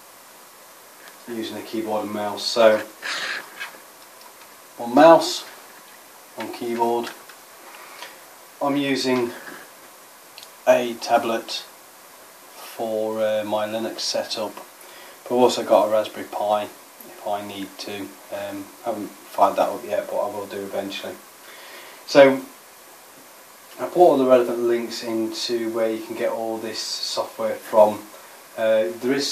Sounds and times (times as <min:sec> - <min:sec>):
Speech: 0:01.2 - 0:03.0, 0:04.8 - 0:05.6, 0:06.4 - 0:07.2, 0:08.6 - 0:09.6, 0:10.6 - 0:11.7, 0:12.6 - 0:14.7, 0:15.3 - 0:21.2, 0:22.1 - 0:22.5, 0:23.8 - 0:29.3.